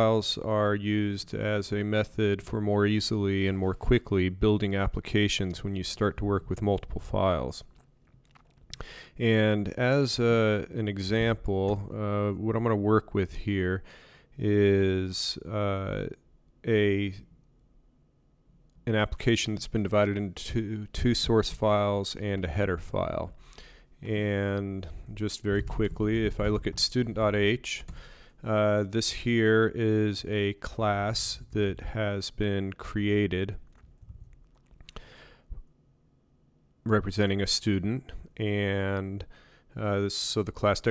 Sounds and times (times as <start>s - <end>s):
Speech: 0.0s - 7.7s, 9.2s - 17.3s, 18.8s - 23.4s, 24.0s - 33.6s, 36.8s - 40.9s.